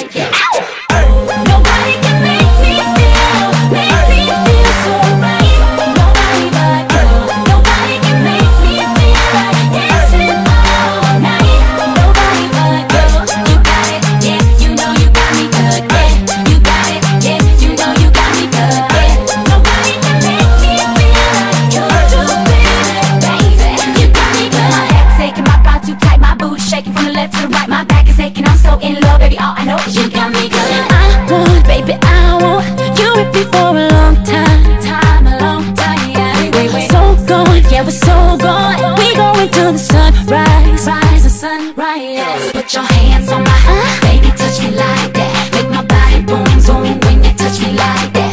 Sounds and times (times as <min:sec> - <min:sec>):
Rhythm and blues: 0:00.0 - 0:48.3.